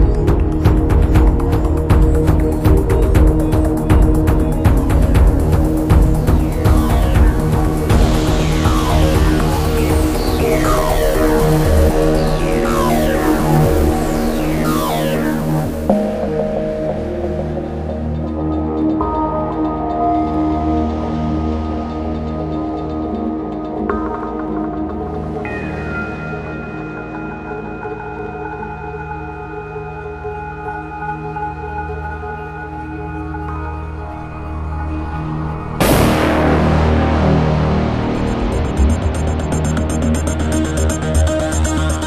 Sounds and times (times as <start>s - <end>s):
Music: 0.0s - 42.0s
Sound effect: 6.4s - 18.0s.